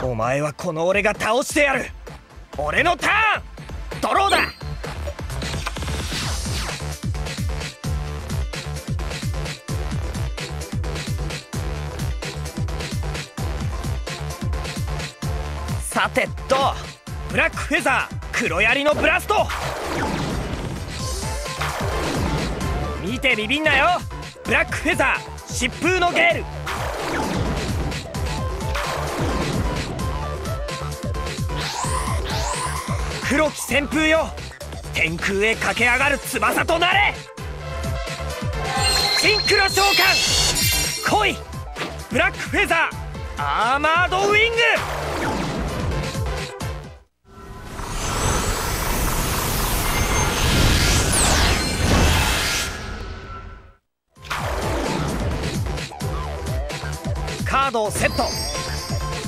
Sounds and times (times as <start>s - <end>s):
Speech: 0.0s - 2.0s, 2.6s - 3.4s, 4.0s - 4.5s, 15.8s - 19.5s, 23.0s - 26.4s, 33.2s - 34.4s, 35.0s - 37.2s, 39.2s - 40.2s, 41.0s - 41.4s, 42.1s - 44.8s, 57.4s - 58.4s
Music: 0.0s - 48.0s, 53.7s - 59.2s.